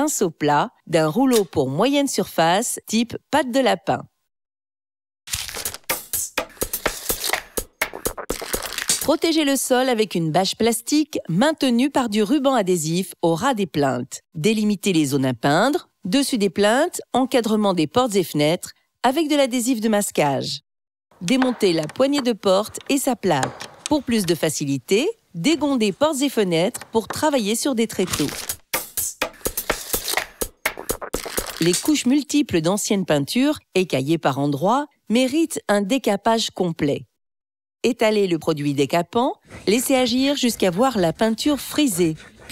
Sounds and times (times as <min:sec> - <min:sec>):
Speech: 0:00.0 - 0:04.1, 0:09.1 - 0:20.6, 0:21.2 - 0:28.4, 0:31.6 - 0:37.1, 0:37.9 - 0:42.5
Music: 0:05.9 - 0:08.3, 0:28.7 - 0:31.2.